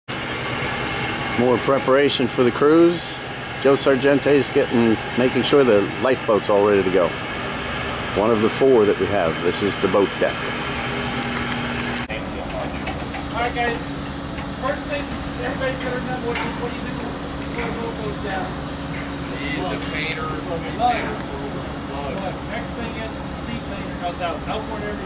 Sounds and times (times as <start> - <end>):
Engine: 0.1 - 25.0
Outside, urban or manmade: 0.1 - 25.0
Vehicle: 0.1 - 25.0
Speech: 1.4 - 7.2, 8.2 - 10.4, 12.1 - 13.9, 14.6 - 18.6, 19.2 - 25.0.